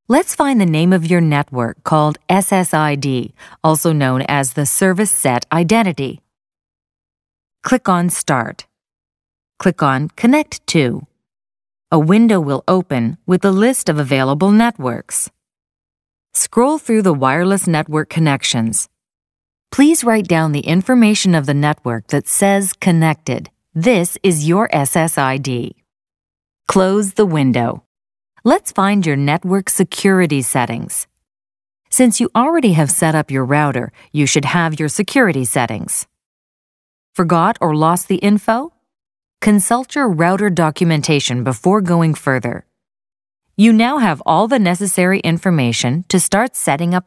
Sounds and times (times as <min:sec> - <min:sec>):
Speech: 0:00.1 - 0:06.3, 0:07.7 - 0:08.7, 0:09.6 - 0:11.1, 0:11.9 - 0:15.4, 0:16.4 - 0:18.9, 0:19.8 - 0:25.8, 0:26.7 - 0:31.1, 0:31.9 - 0:36.1, 0:37.2 - 0:38.8, 0:39.4 - 0:42.7, 0:43.6 - 0:47.0.